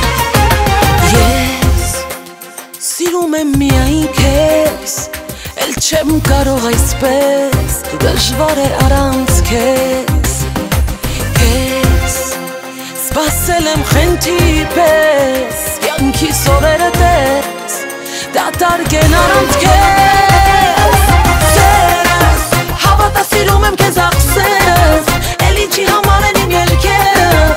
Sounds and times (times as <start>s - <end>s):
Soundtrack music: 0.0s - 27.5s.